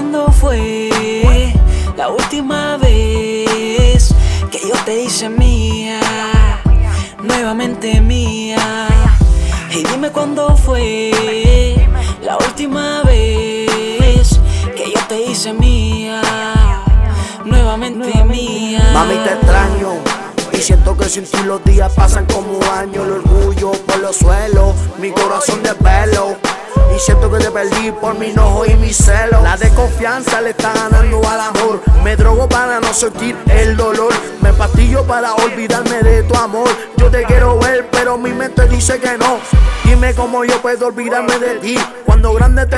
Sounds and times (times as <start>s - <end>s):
Soundtrack music: 0.3s - 42.7s.